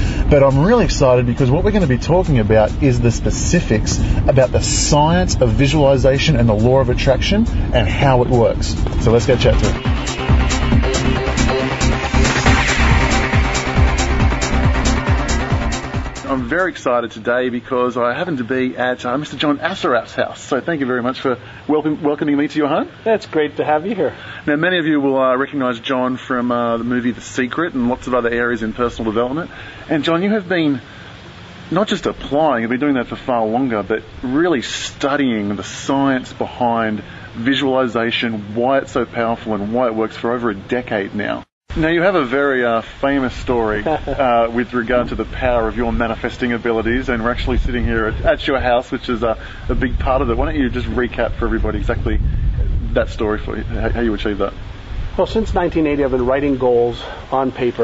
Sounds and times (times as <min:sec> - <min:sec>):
Music: 0:00.0 - 0:16.8
Speech: 0:00.3 - 0:09.8, 0:16.2 - 0:30.8, 0:31.7 - 0:54.6, 0:55.2 - 0:57.8.